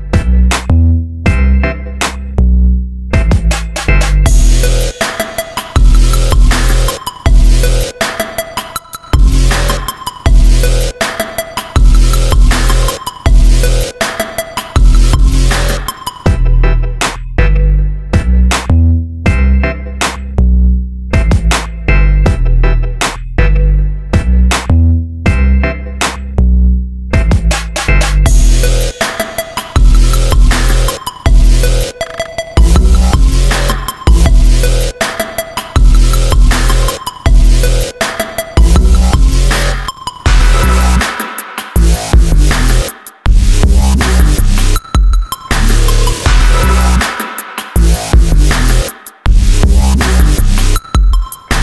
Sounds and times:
Drum and bass: 0:00.0 - 0:51.6.

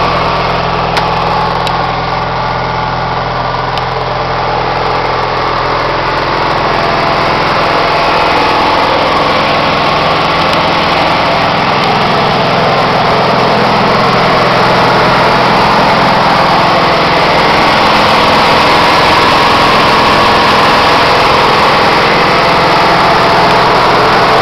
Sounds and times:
Idling: 0:00.0 - 0:24.4
Vehicle: 0:00.0 - 0:24.4.

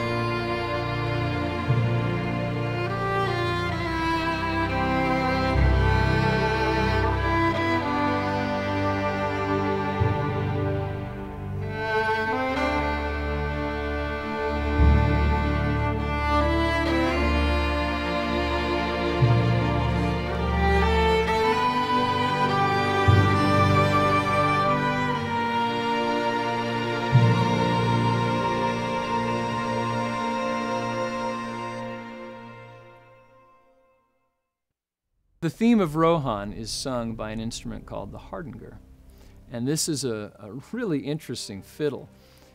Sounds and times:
Music: 0:00.0 - 0:42.5.

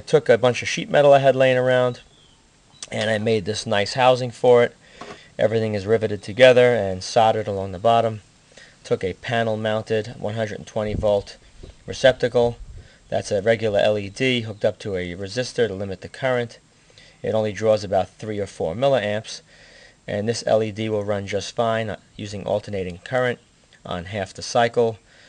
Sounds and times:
Speech: 0:00.0 - 0:02.1, 0:02.8 - 0:04.8, 0:05.4 - 0:16.6, 0:17.2 - 0:19.5, 0:20.1 - 0:25.0.

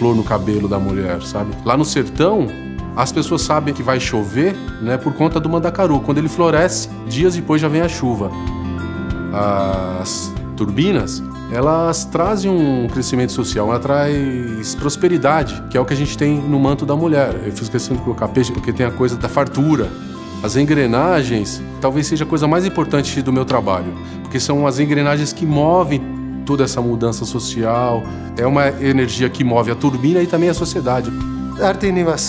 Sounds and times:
Speech: 0:00.0 - 0:08.4, 0:09.3 - 0:32.2
Music: 0:00.0 - 0:32.2.

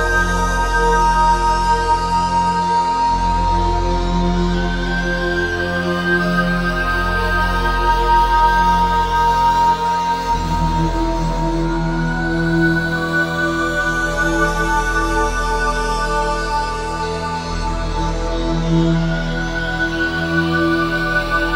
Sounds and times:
Music: 0:00.0 - 0:21.5.

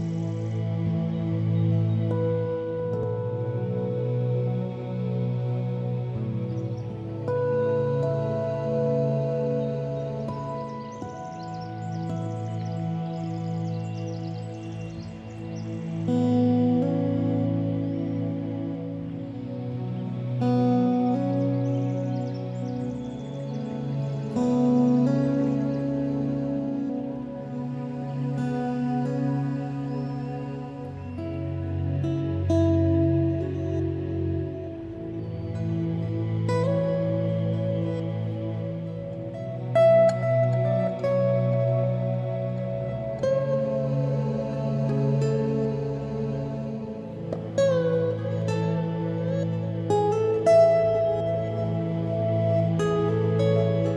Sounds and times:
Music: 0:00.0 - 0:53.9.

